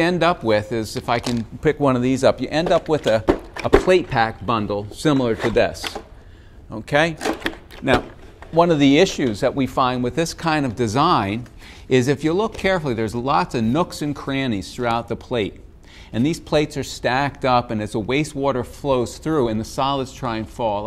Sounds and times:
Speech: 0.0s - 6.0s, 6.7s - 15.6s, 16.2s - 20.8s.

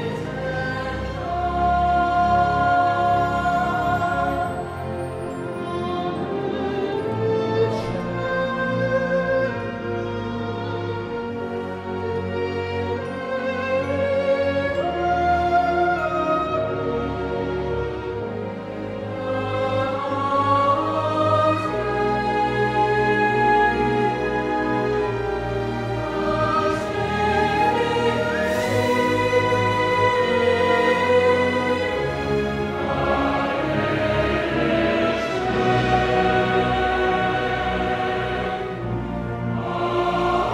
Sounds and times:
Opera: 0.0s - 40.5s.

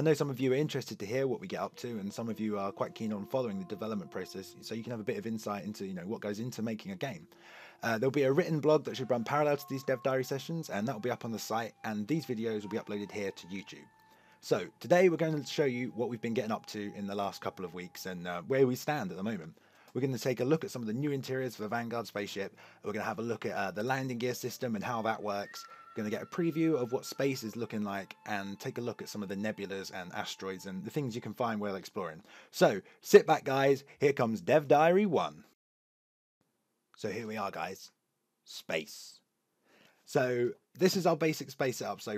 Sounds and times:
Music: 0.0s - 32.4s
Speech: 0.0s - 35.5s, 37.0s - 39.2s, 40.1s - 42.1s.

